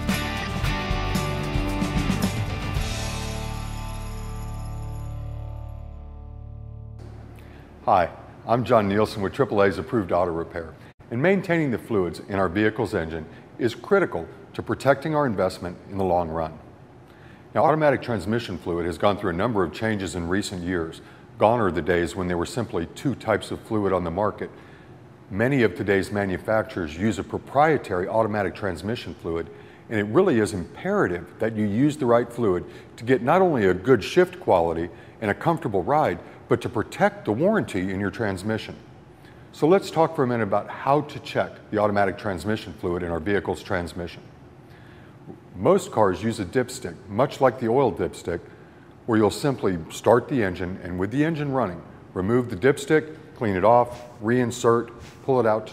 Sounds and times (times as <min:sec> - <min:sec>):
Speech: 0:07.8 - 0:16.7, 0:17.6 - 0:24.6, 0:25.3 - 0:38.9, 0:39.5 - 0:44.3, 0:45.6 - 0:48.5, 0:49.1 - 0:55.7.